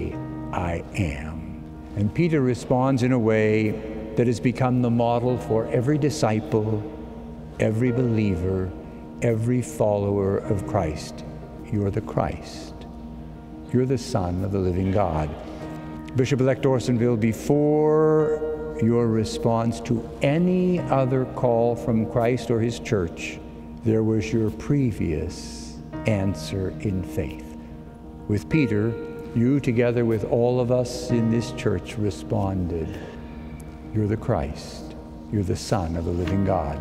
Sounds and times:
Speech: 0.0 - 6.9, 7.6 - 12.8, 13.7 - 15.4, 16.2 - 27.5, 28.3 - 33.1, 33.9 - 36.8
Music: 0.0 - 36.8.

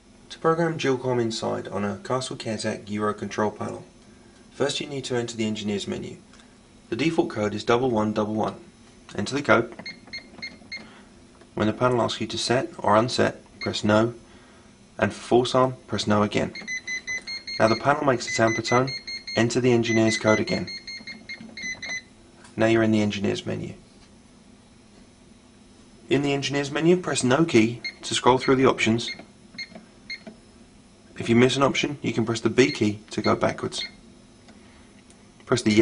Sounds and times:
Inside, small room: 0.0 - 35.8
Speech: 0.3 - 3.9, 4.6 - 6.2, 6.9 - 9.8, 11.6 - 14.2, 15.0 - 16.6, 17.6 - 20.8, 22.6 - 23.9, 26.1 - 29.2, 31.2 - 34.0, 35.5 - 35.8.

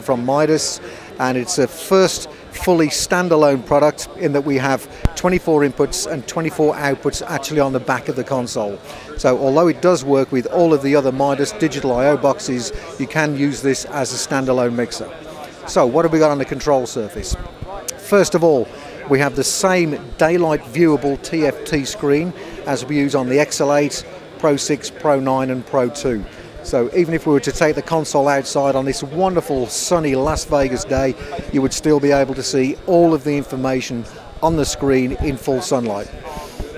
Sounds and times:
Speech: 0.0 - 36.7.

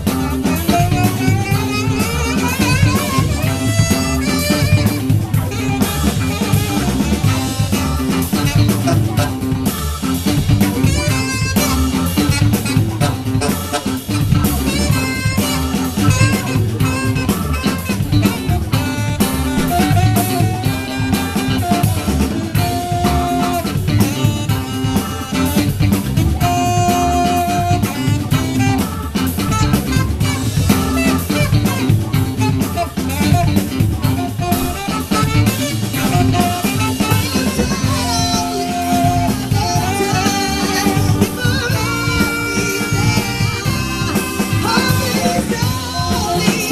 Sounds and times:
Funk: 0.0 - 46.7
Singing: 36.4 - 46.7.

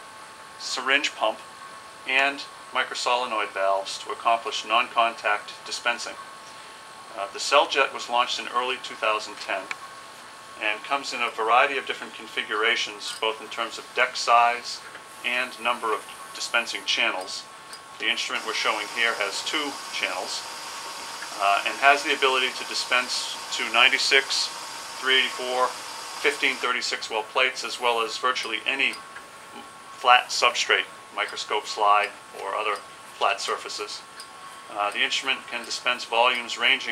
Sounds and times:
Speech: 0.6 - 1.4, 2.1 - 6.2, 7.1 - 9.8, 10.6 - 20.4, 21.4 - 29.0, 29.6 - 34.1, 34.7 - 36.9.

